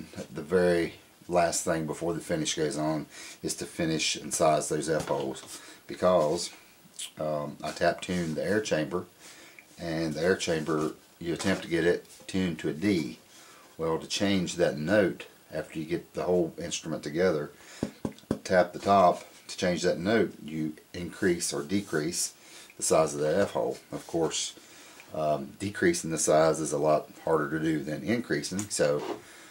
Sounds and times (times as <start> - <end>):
Speech: 0.0 - 9.1, 9.8 - 13.2, 13.8 - 17.6, 18.3 - 29.2.